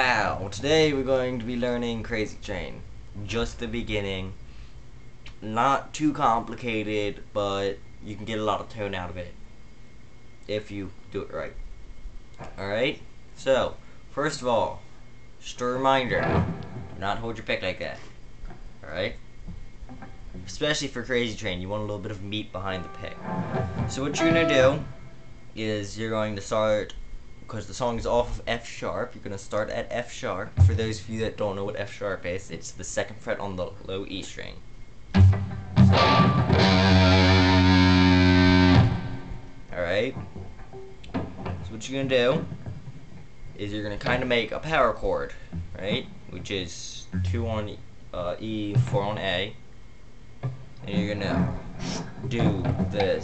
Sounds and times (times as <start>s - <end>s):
Speech: 0.0s - 4.4s, 5.4s - 9.4s, 10.5s - 11.6s, 12.4s - 14.8s, 15.4s - 16.3s, 17.0s - 18.1s, 18.8s - 19.2s, 20.4s - 23.2s, 23.9s - 24.9s, 25.6s - 34.6s, 39.7s - 40.2s, 41.6s - 42.5s, 43.6s - 49.6s, 50.8s - 51.5s, 52.2s - 53.2s
Guitar: 15.6s - 20.5s, 22.0s - 25.6s, 30.5s - 31.0s, 35.1s - 46.4s, 47.1s - 47.8s, 50.4s - 53.2s.